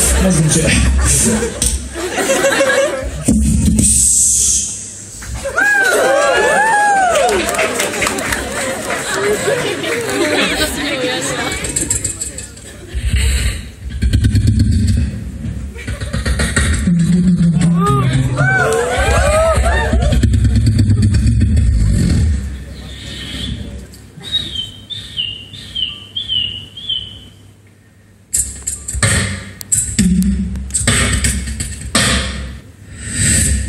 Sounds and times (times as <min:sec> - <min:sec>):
Beatboxing: 0:03.0 - 0:05.4, 0:11.5 - 0:25.9, 0:28.3 - 0:33.6.